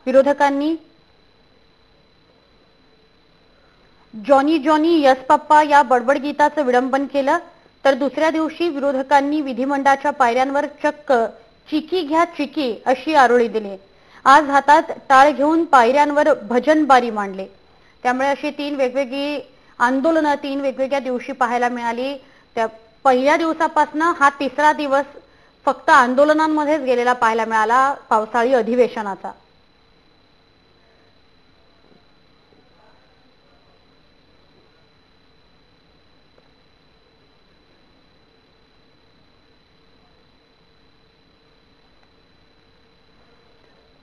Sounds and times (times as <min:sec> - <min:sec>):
Female speech, woman speaking: 0:00.0 - 0:00.9, 0:04.2 - 0:29.4
Narration, monologue: 0:00.0 - 0:02.1, 0:03.1 - 0:29.7.